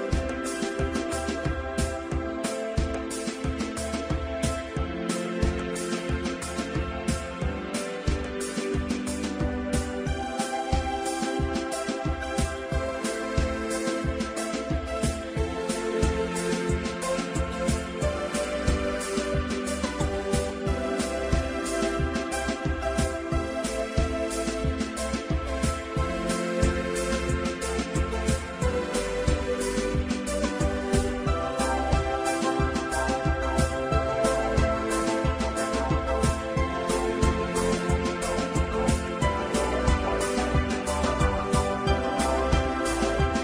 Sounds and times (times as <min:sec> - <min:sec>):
Music: 0:00.0 - 0:43.4.